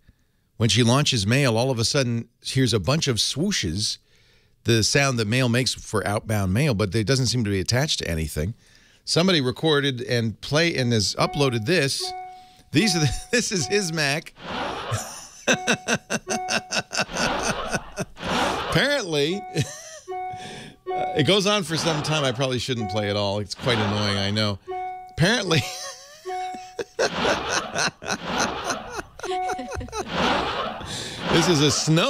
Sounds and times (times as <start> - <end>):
Speech: 0.6 - 4.0, 4.7 - 12.1, 12.8 - 14.3, 18.8 - 19.4, 21.2 - 24.6, 25.2 - 25.8, 31.3 - 32.1.